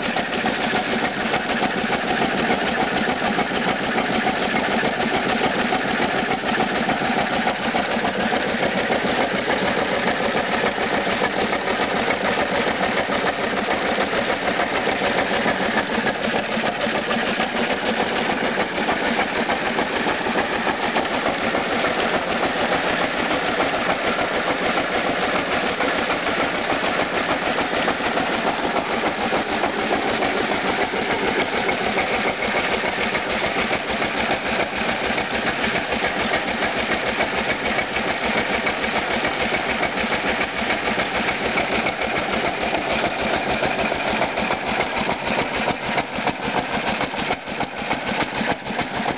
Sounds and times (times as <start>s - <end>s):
Idling: 0.0s - 49.1s
Medium engine (mid frequency): 0.0s - 49.1s.